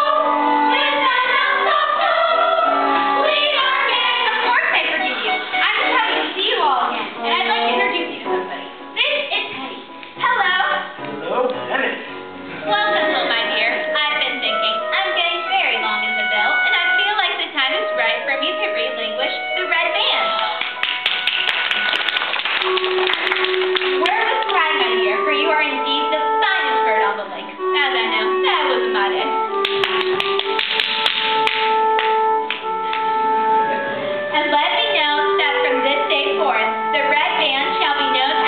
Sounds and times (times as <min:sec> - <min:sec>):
Music: 0:00.0 - 0:38.4.